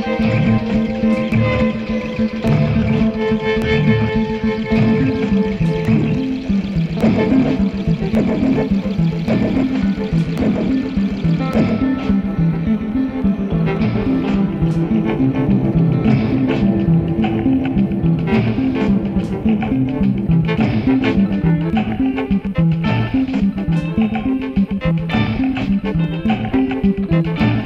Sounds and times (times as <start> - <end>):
Electronic music: 0.0 - 27.6.